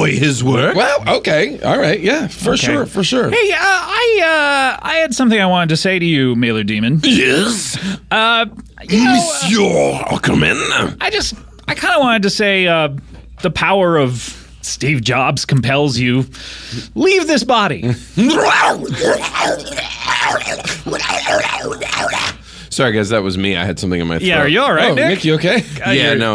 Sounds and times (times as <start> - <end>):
Speech: 0.0 - 16.3, 16.9 - 26.3.